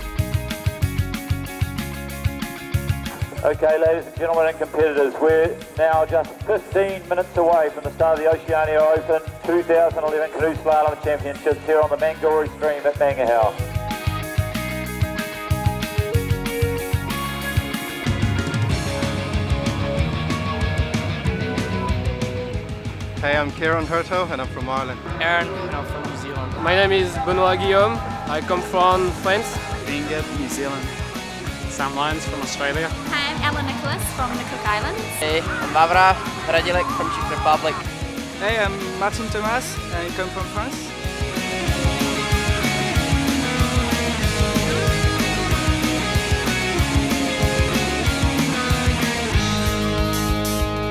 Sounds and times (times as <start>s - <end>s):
Music: 0.0s - 50.9s.